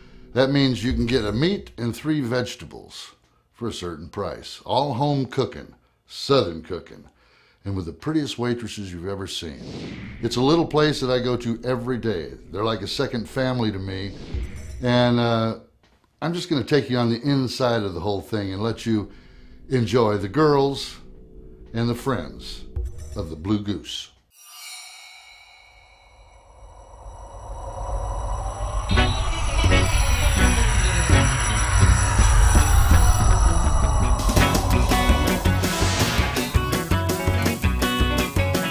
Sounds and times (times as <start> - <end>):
Speech: 0.4 - 14.2, 14.8 - 19.1, 19.7 - 21.0, 21.8 - 24.2.